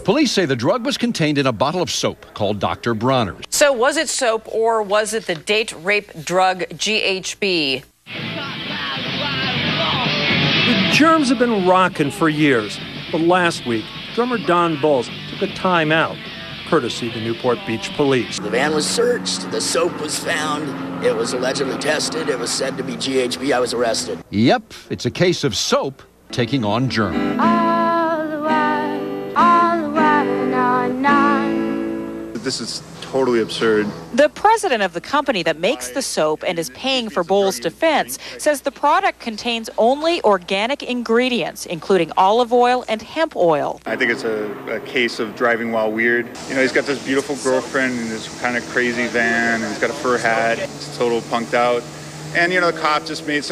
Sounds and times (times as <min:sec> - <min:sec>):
Speech: 0:10.8 - 0:27.2, 0:32.4 - 0:51.8.